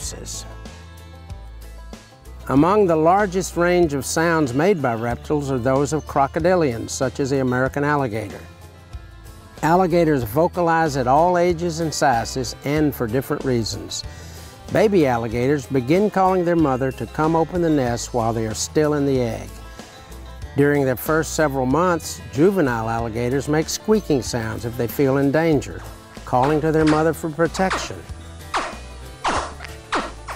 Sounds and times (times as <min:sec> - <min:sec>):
Speech: 0:00.0 - 0:00.5, 0:02.5 - 0:08.5, 0:09.6 - 0:14.0, 0:14.7 - 0:19.5, 0:20.6 - 0:28.1
Music: 0:00.0 - 0:30.3.